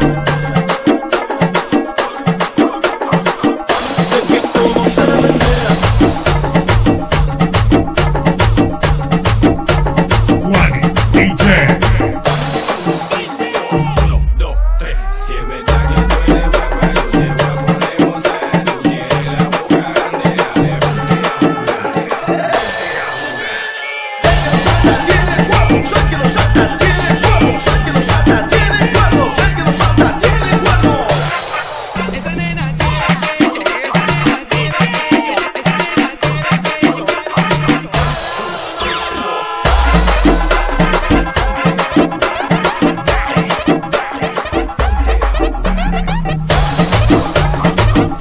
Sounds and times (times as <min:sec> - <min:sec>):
Music: 0:00.0 - 0:48.2.